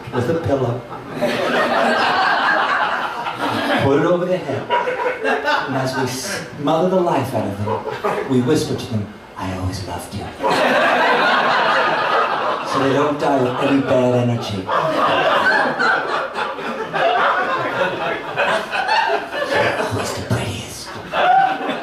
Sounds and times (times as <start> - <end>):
Speech: 0.0 - 0.9, 3.7 - 4.7, 5.6 - 10.5, 12.7 - 14.9, 19.5 - 21.0.